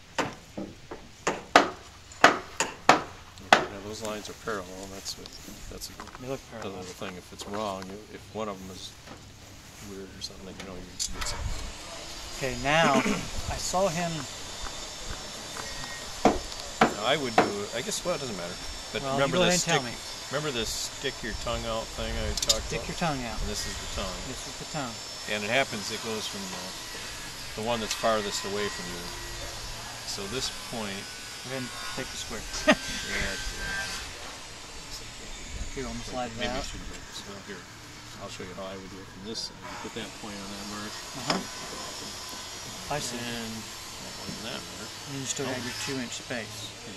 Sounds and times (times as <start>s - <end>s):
Speech: 3.4s - 8.9s, 9.8s - 11.3s, 16.9s - 26.8s, 27.6s - 29.1s, 30.1s - 33.9s, 34.9s - 37.6s, 38.2s - 41.5s, 42.9s - 43.7s, 44.3s - 46.9s
Wood: 15.6s - 17.6s
Tools: 22.4s - 22.6s.